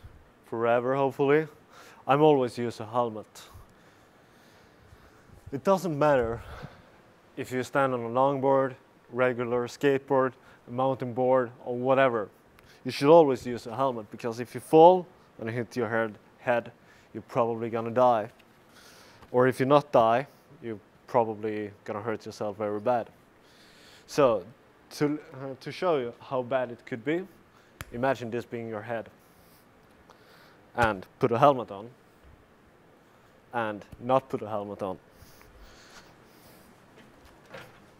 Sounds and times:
Speech: 0:00.4 - 0:03.6, 0:05.5 - 0:06.6, 0:07.4 - 0:18.4, 0:19.3 - 0:23.2, 0:24.1 - 0:29.2, 0:30.7 - 0:32.0, 0:33.5 - 0:35.0.

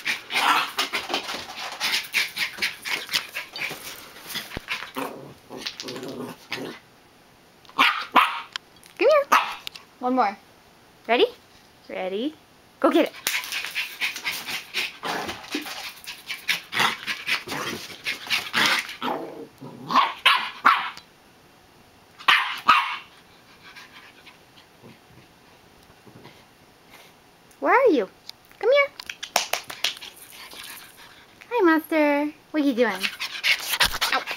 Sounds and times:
Inside, small room: 0:00.0 - 0:34.3
Bark: 0:07.8 - 0:08.6, 0:09.3 - 0:09.6, 0:19.9 - 0:21.0, 0:22.2 - 0:23.1
Bow-wow: 0:07.8 - 0:08.6, 0:09.3 - 0:09.6, 0:19.8 - 0:21.0, 0:22.2 - 0:23.1
Speech: 0:09.0 - 0:09.3, 0:10.0 - 0:10.4, 0:11.1 - 0:13.2, 0:27.6 - 0:29.0, 0:31.5 - 0:33.1.

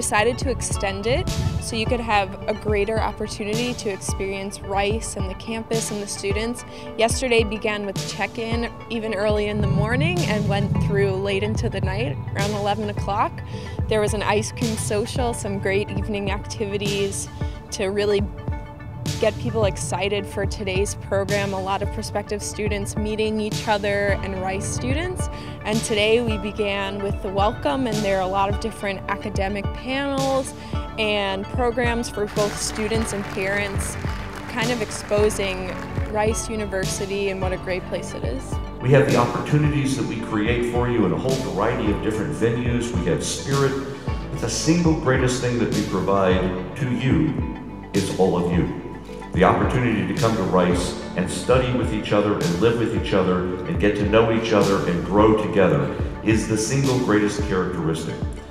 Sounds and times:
Speech: 0:00.0 - 0:13.3, 0:13.9 - 0:18.3, 0:19.2 - 0:33.9, 0:34.5 - 0:43.8, 0:44.4 - 0:47.4, 0:48.0 - 0:48.8, 0:49.4 - 0:58.3
Music: 0:00.0 - 0:58.5.

